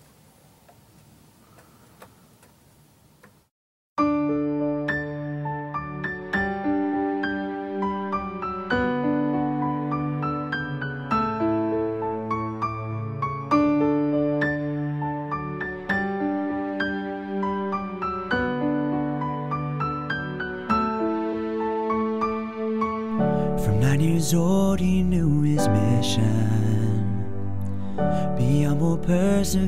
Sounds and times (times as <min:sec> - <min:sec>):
Sad music: 0:04.0 - 0:29.6.